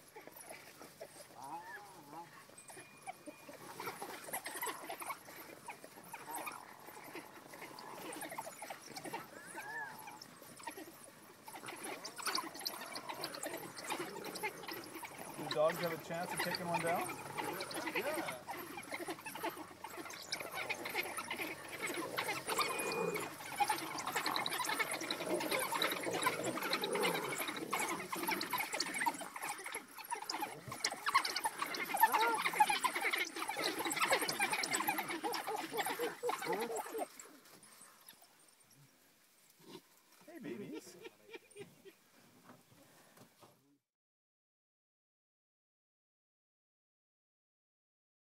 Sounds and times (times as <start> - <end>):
Domestic animals, pets: 0.0 - 43.5.